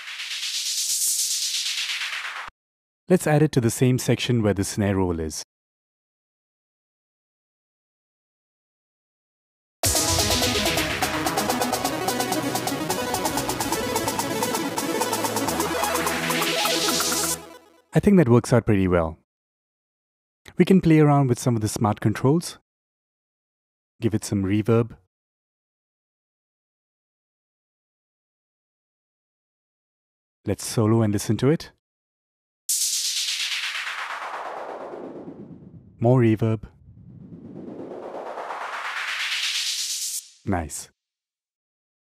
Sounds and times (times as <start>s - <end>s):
Speech: 3.1s - 5.5s, 18.0s - 19.2s, 20.5s - 22.6s, 24.0s - 25.0s, 30.5s - 31.8s, 36.0s - 36.7s, 40.5s - 40.9s
Music: 9.8s - 18.0s.